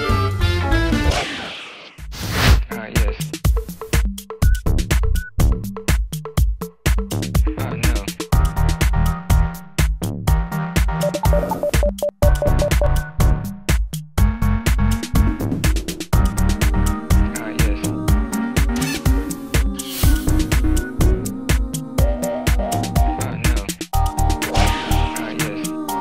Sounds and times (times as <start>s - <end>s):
Jingle (music): 11.0s - 13.4s, 24.0s - 26.0s.